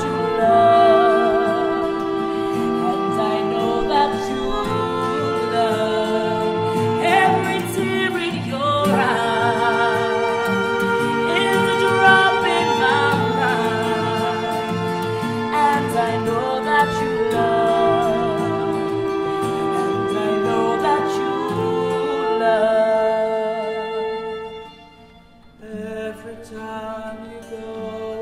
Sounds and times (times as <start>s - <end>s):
Singing: 0.0s - 24.4s, 25.6s - 28.2s
Inside, large room or hall: 0.0s - 28.2s
Music: 0.0s - 28.2s.